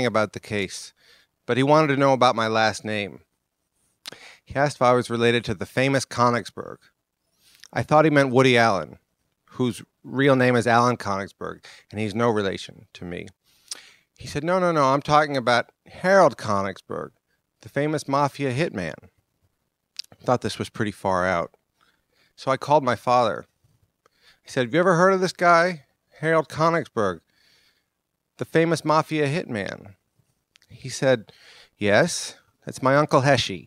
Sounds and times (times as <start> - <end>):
Speech: 0.0 - 3.3, 4.5 - 6.9, 7.7 - 13.4, 14.2 - 19.1, 20.0 - 21.6, 22.4 - 23.5, 24.5 - 27.2, 28.4 - 30.0, 30.6 - 33.6.